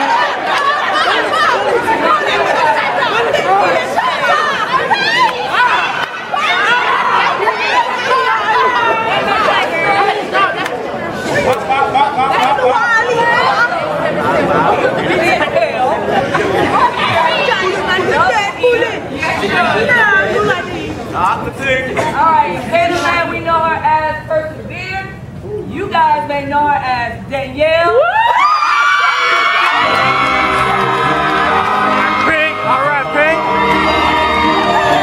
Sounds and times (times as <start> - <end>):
Inside, large room or hall: 0.0 - 35.0
Music: 29.7 - 35.0.